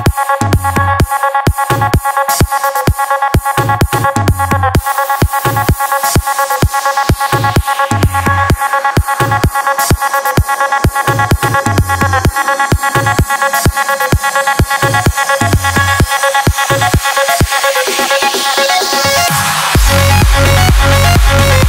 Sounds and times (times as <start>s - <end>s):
Electronic dance music: 0.0s - 21.6s.